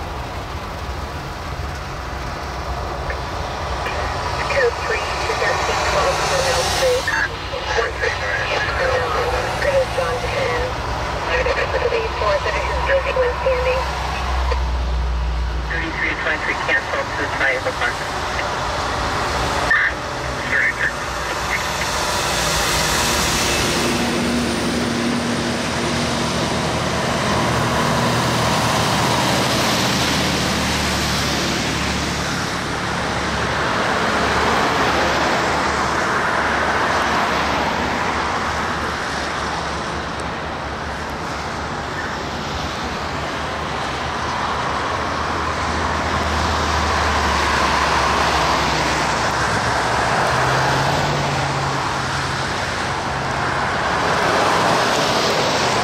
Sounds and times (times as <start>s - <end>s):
Car: 0.0s - 55.8s
Outside, urban or manmade: 0.0s - 55.8s
Truck: 0.0s - 55.8s.